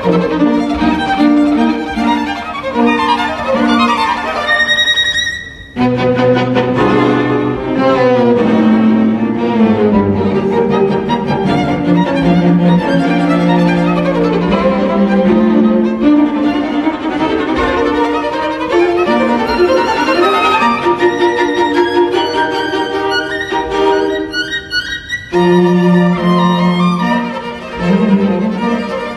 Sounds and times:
Classical music: 0.0 - 29.1
Orchestra: 0.0 - 29.1
Violin, fiddle: 0.0 - 29.1.

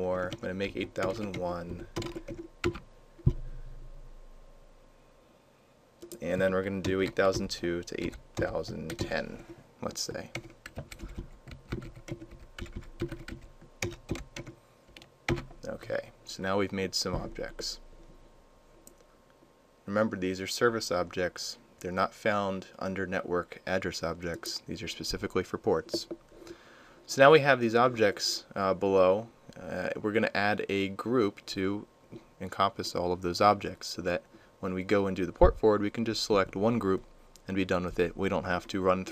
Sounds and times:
Computer keyboard: 0.2 - 2.8, 6.8 - 9.5, 10.3 - 15.5.

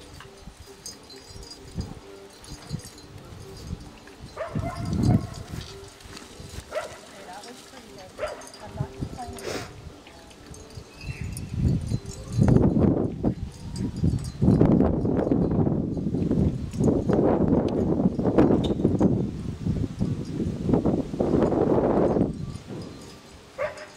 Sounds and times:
Clip-clop: 0.0 - 19.2, 21.4 - 23.9
Speech: 7.1 - 10.4.

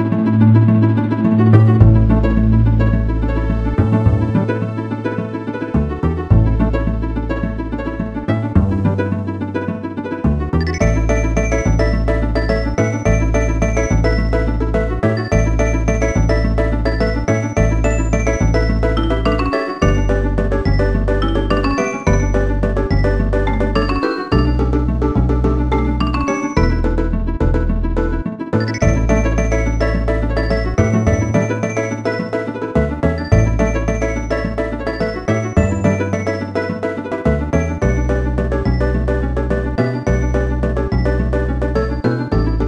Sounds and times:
Soundtrack music: 0.0 - 42.6.

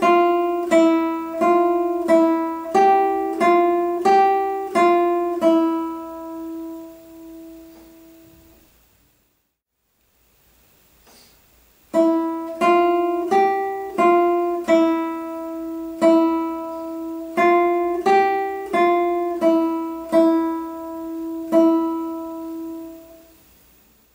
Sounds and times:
Acoustic guitar: 0.0 - 8.8, 11.0 - 23.6.

